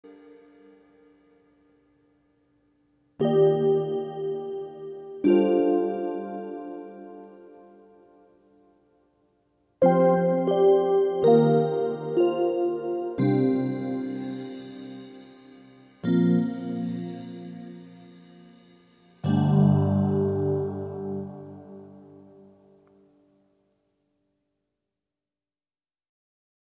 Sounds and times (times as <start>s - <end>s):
New-age music: 0.0s - 9.0s, 9.8s - 23.3s.